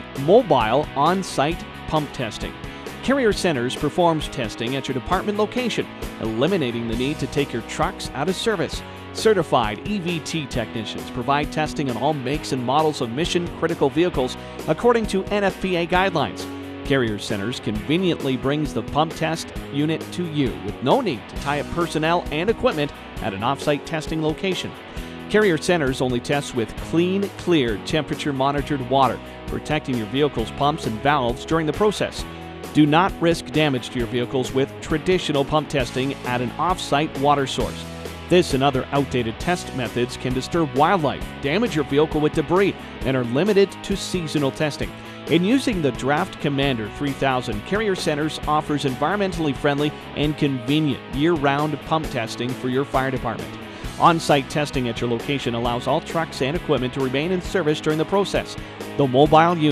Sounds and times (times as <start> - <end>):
Music: 0.0 - 59.7
Speech: 0.0 - 59.7.